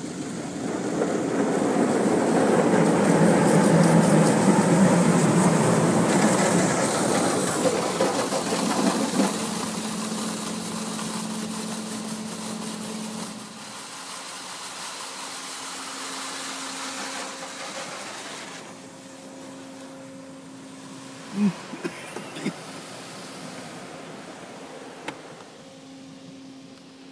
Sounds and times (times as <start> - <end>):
Water: 0.0 - 27.1.